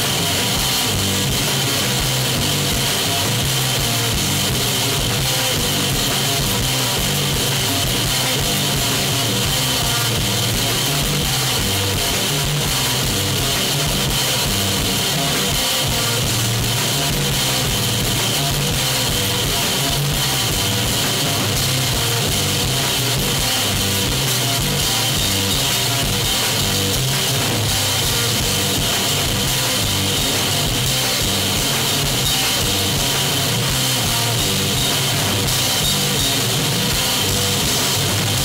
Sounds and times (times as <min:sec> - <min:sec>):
Rock music: 0:00.0 - 0:38.4.